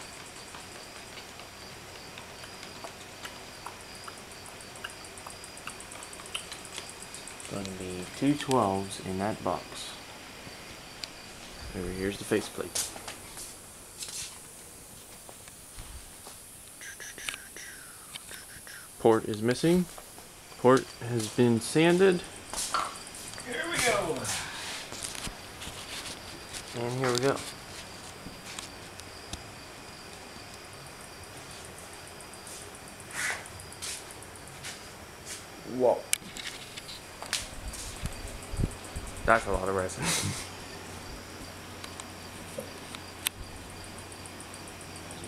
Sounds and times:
Speech: 7.5 - 10.0, 11.7 - 12.8, 19.0 - 19.9, 20.6 - 22.3, 23.4 - 24.6, 26.7 - 27.5, 35.7 - 36.1, 39.3 - 40.2.

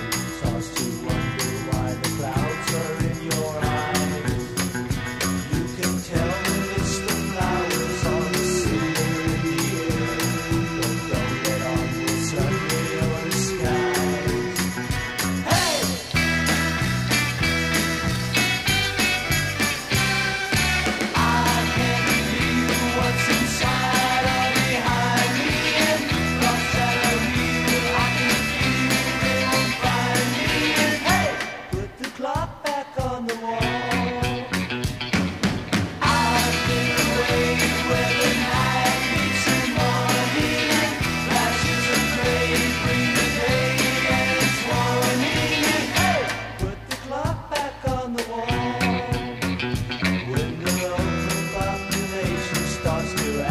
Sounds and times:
Music: 0.0 - 53.5.

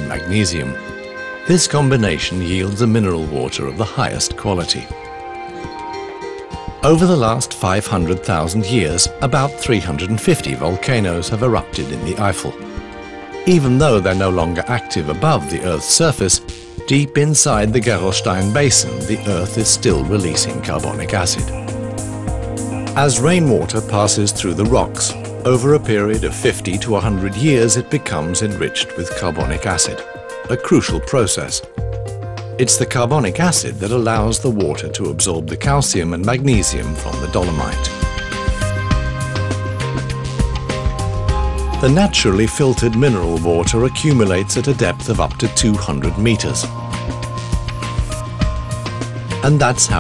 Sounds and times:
Speech: 0.0 - 0.8, 1.5 - 4.9, 6.8 - 12.6, 13.5 - 21.6, 23.0 - 31.7, 32.6 - 38.0, 41.8 - 46.7, 49.4 - 50.0
Music: 0.0 - 50.0.

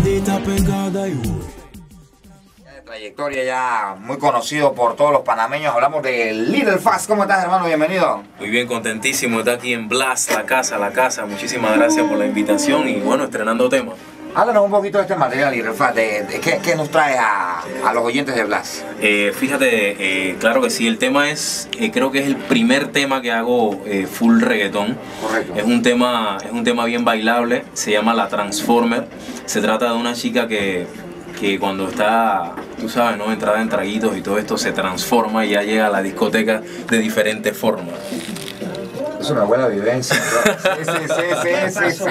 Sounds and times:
Music: 0.0 - 42.1
Speech: 2.7 - 38.0.

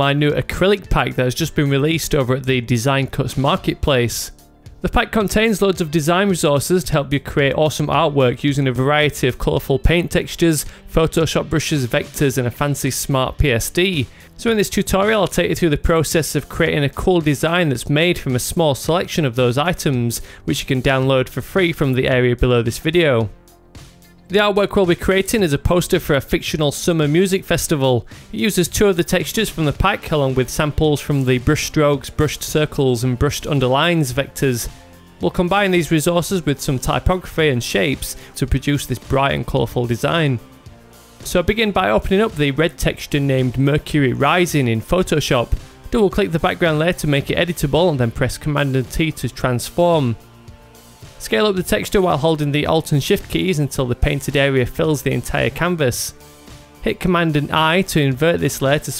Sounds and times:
Speech: 0.0 - 23.4, 24.3 - 40.5, 41.2 - 50.2, 51.2 - 56.2, 56.8 - 58.9
Music: 0.0 - 58.9.

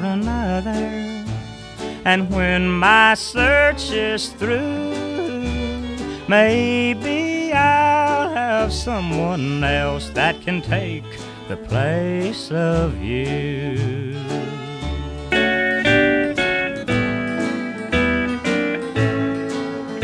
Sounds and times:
Blues: 0.0 - 20.0
Steel guitar, slide guitar: 0.0 - 20.0.

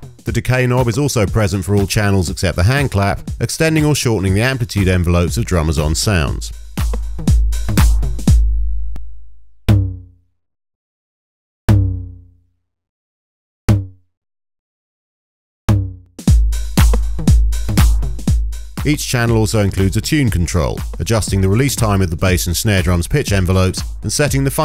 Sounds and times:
Drum machine: 0.0 - 9.0, 15.7 - 24.6.

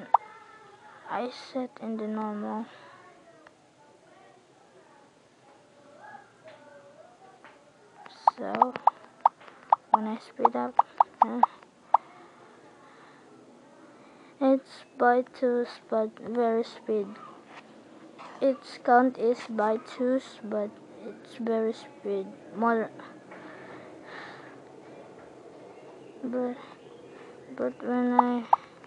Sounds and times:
Speech: 0.0 - 9.2, 9.9 - 17.4, 18.2 - 23.2, 26.2 - 26.8, 27.5 - 28.5.

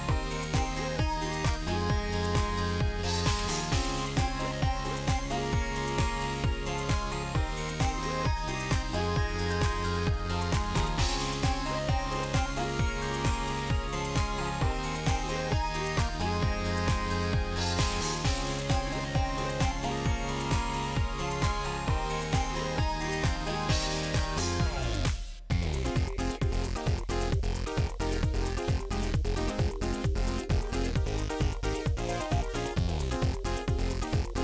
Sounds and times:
Music: 0.0 - 34.4
Sound effect: 0.0 - 34.4.

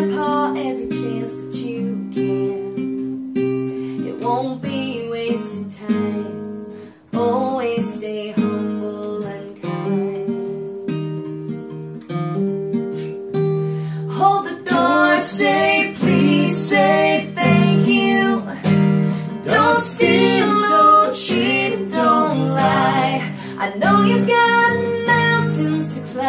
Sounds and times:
Strum: 9.7 - 26.2.

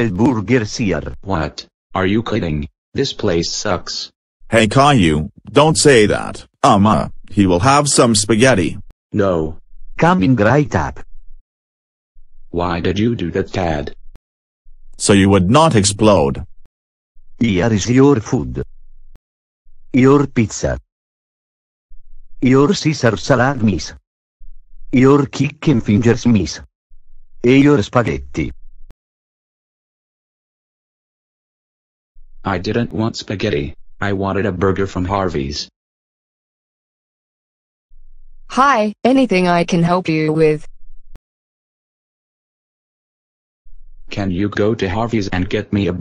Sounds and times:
Speech: 0.0 - 11.0, 12.6 - 14.0, 15.0 - 16.5, 17.4 - 18.7, 20.0 - 20.9, 22.4 - 24.0, 25.0 - 26.7, 27.5 - 28.5, 32.5 - 35.8, 38.5 - 40.7, 44.1 - 46.0.

